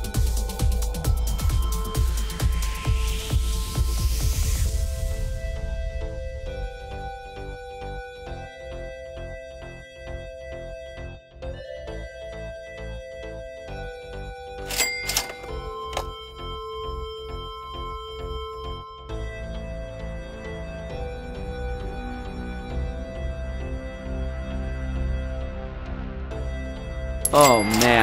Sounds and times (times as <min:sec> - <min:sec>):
Music: 0:00.0 - 0:28.0.